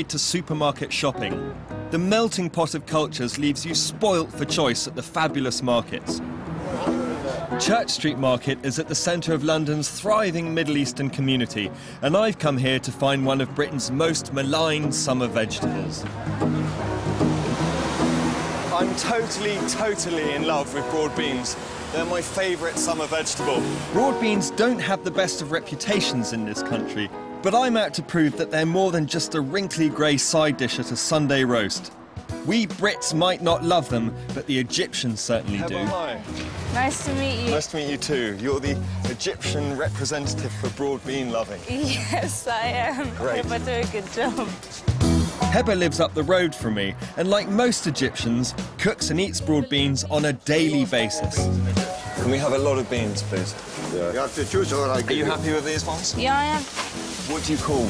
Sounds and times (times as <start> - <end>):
Music: 0.0 - 57.8.